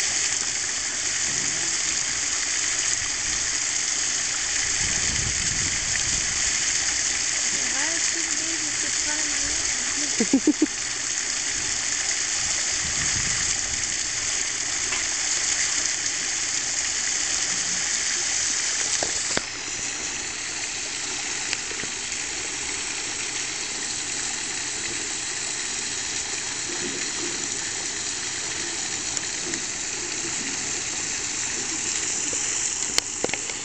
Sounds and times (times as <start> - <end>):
Water: 0.0 - 33.6.